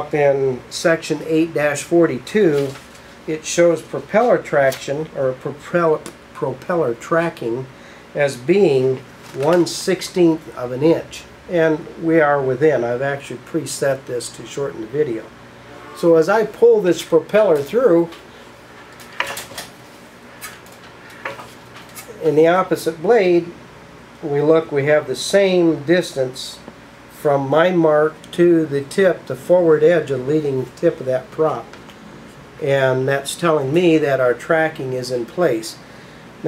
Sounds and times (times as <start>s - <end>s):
Speech: 0.0s - 15.4s, 16.0s - 18.2s, 22.0s - 23.6s, 24.2s - 31.8s, 32.6s - 35.8s.